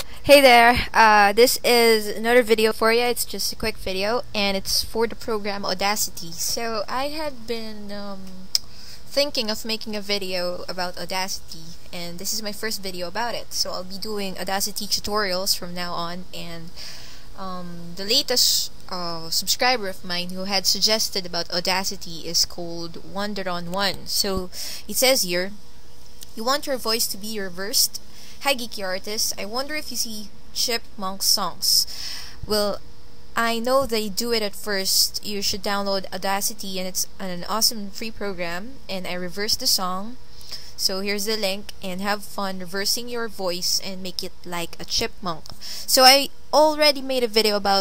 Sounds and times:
Speech: 0.2s - 16.8s, 17.4s - 25.6s, 26.2s - 31.9s, 32.5s - 32.8s, 33.4s - 40.2s, 40.8s - 47.8s.

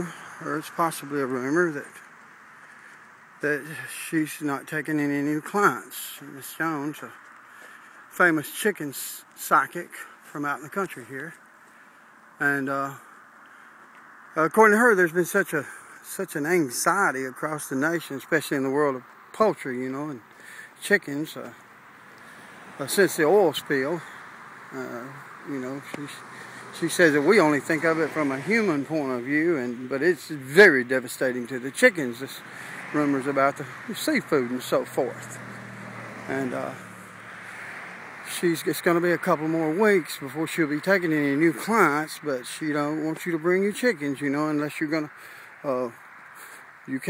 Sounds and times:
Speech: 0.0s - 2.0s, 3.4s - 7.2s, 8.2s - 11.4s, 12.4s - 13.0s, 14.4s - 21.6s, 22.8s - 24.1s, 24.8s - 26.2s, 26.8s - 35.4s, 36.3s - 36.8s, 38.3s - 46.0s, 46.9s - 47.1s.

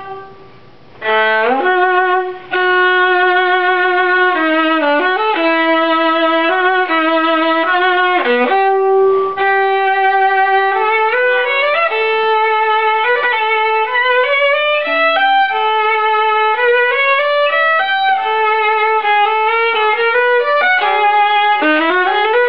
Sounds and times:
Violin, fiddle: 0.0s - 22.4s.

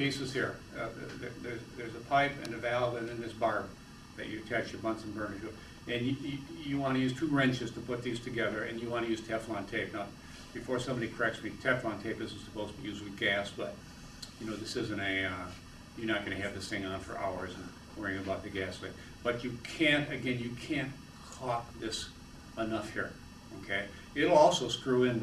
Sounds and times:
Speech: 0.0s - 25.2s.

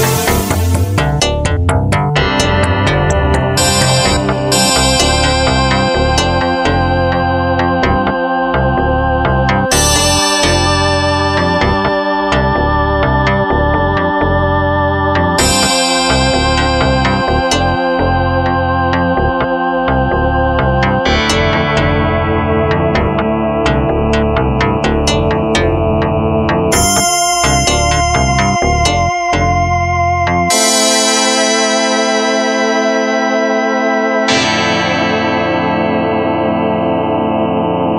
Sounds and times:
Effects unit: 0.0s - 37.9s
Music: 0.0s - 37.9s.

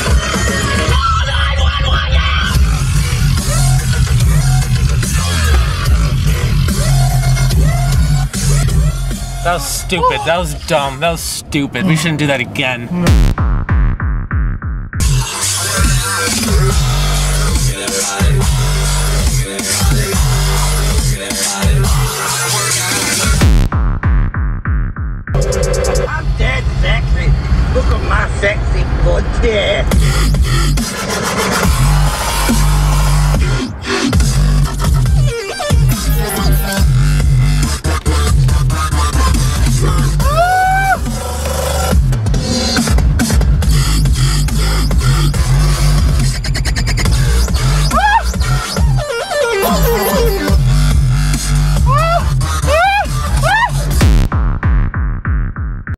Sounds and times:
Speech: 9.4s - 13.2s, 26.1s - 29.9s, 49.6s - 50.6s.

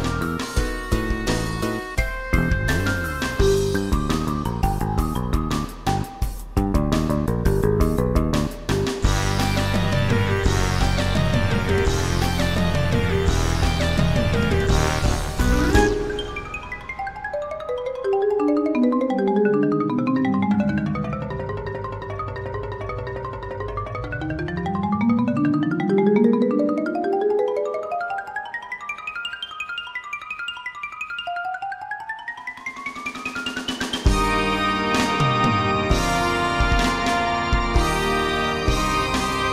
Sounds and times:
Vibraphone: 0.0s - 12.6s, 15.4s - 39.5s.

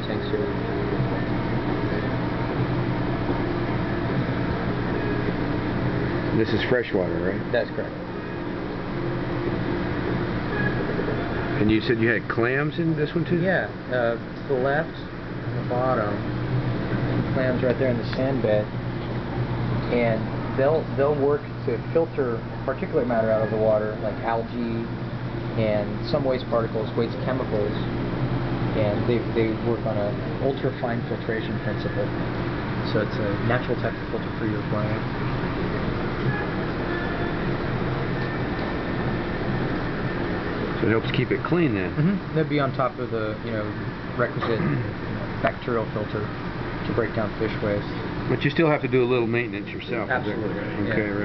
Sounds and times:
Speech: 0.0s - 0.6s, 6.3s - 8.0s, 11.6s - 15.1s, 17.3s - 18.7s, 19.9s - 24.9s, 25.6s - 27.9s, 28.7s - 32.1s, 32.9s - 35.0s, 40.8s - 46.3s, 46.9s - 51.2s.

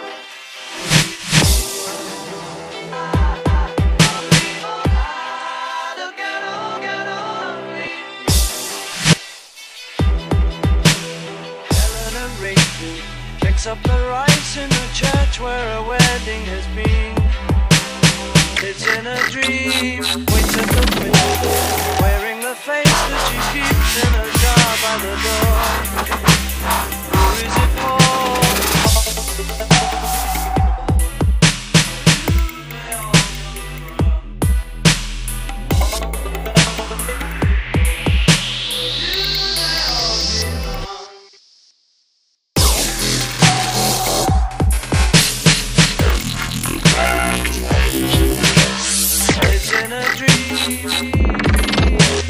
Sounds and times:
Dubstep: 17.8s - 30.5s, 42.6s - 52.3s.

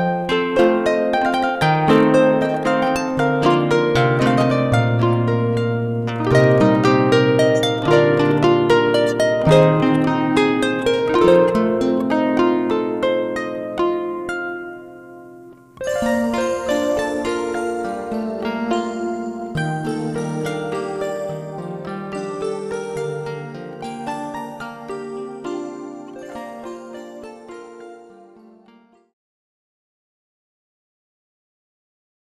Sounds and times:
Harp: 0.0s - 29.2s.

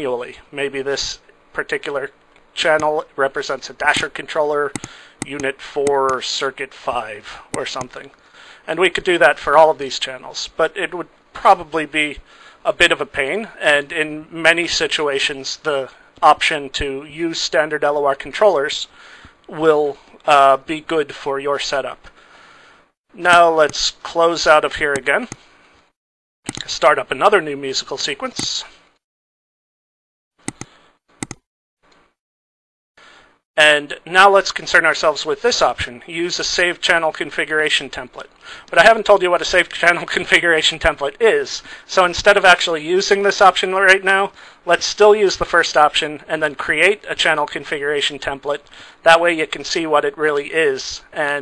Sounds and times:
Speech: 0.0s - 22.1s, 23.1s - 25.4s, 26.5s - 28.8s, 33.6s - 51.4s
Inside, small room: 0.0s - 29.0s, 33.0s - 51.4s.

